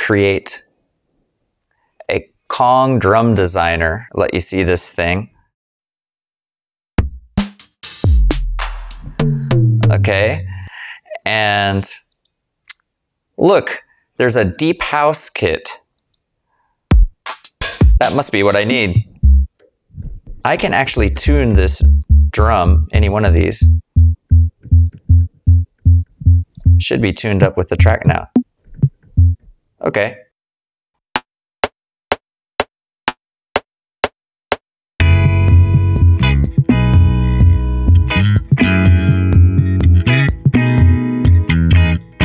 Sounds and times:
Speech: 0.0 - 0.7, 2.0 - 5.4, 9.9 - 12.1, 13.4 - 15.9, 18.0 - 19.1, 20.4 - 23.8, 26.8 - 28.4, 29.8 - 30.3
Drum: 7.0 - 10.5, 16.9 - 19.5, 23.7 - 26.9, 27.8 - 29.4, 38.4 - 40.6
Drum machine: 7.0 - 10.6, 16.9 - 19.5, 23.6 - 26.9, 27.8 - 29.4, 35.0 - 37.6, 38.4 - 40.9.

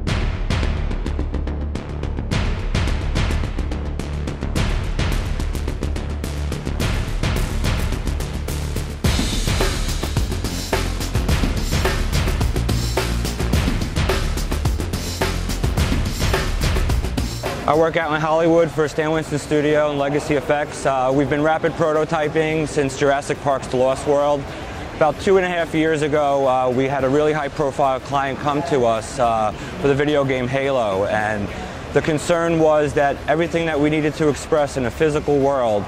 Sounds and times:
Speech: 17.7 - 35.8.

